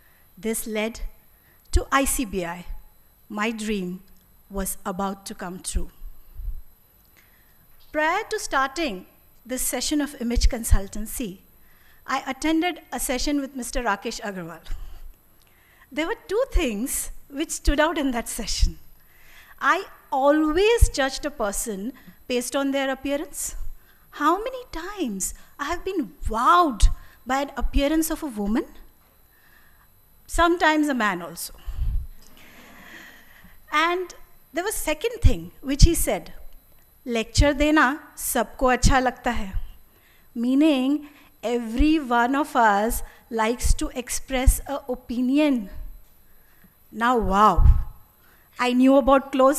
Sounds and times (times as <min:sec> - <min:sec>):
Narration, monologue: 0:00.0 - 0:49.5
Female speech, woman speaking: 0:00.4 - 0:01.1, 0:01.8 - 0:02.7, 0:03.3 - 0:05.9, 0:08.0 - 0:11.4, 0:12.1 - 0:14.7, 0:16.0 - 0:18.8, 0:19.6 - 0:23.6, 0:24.2 - 0:28.8, 0:30.3 - 0:31.6, 0:33.7 - 0:36.4, 0:37.1 - 0:39.6, 0:40.4 - 0:45.8, 0:47.0 - 0:47.9, 0:48.6 - 0:49.5.